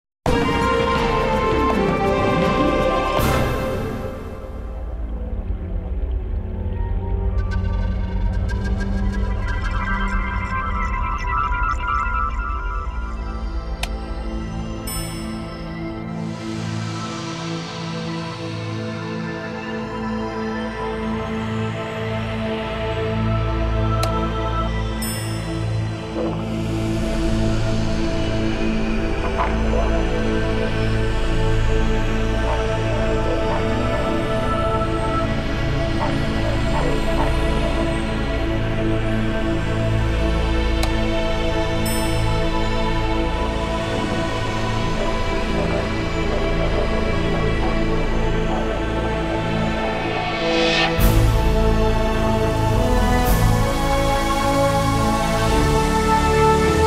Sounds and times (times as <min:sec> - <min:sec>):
Music: 0:00.0 - 0:56.8.